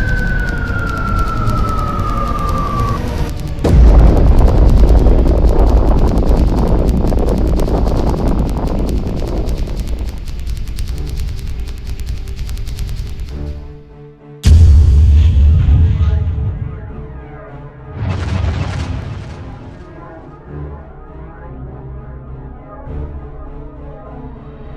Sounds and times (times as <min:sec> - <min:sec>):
Background music: 0:00.0 - 0:24.7.